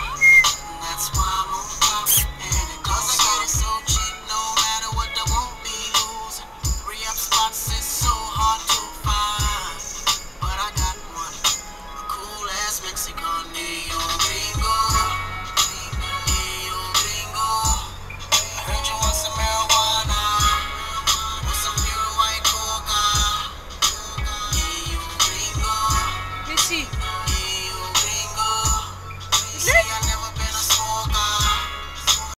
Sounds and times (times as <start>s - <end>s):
Car: 0.0s - 32.3s
Music: 0.0s - 32.3s
Speech: 26.5s - 26.9s, 29.6s - 30.0s.